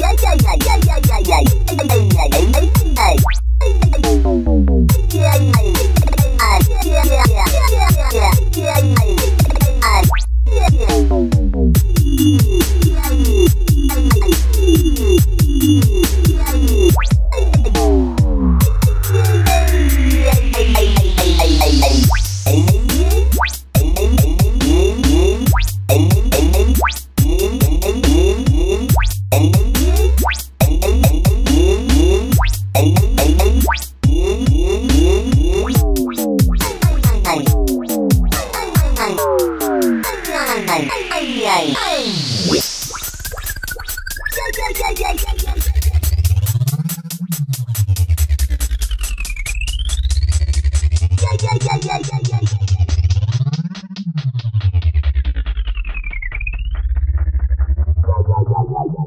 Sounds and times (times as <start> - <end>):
Electronic music: 0.0 - 57.6.